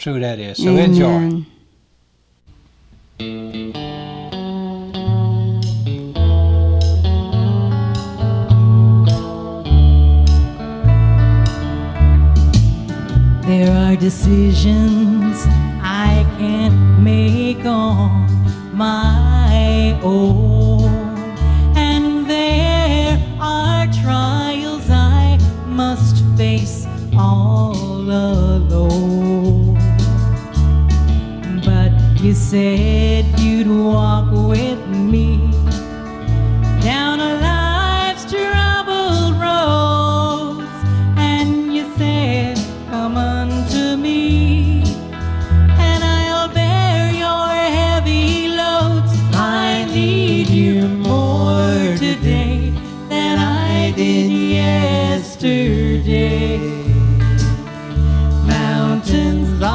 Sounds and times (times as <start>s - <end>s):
Music: 2.5s - 59.7s.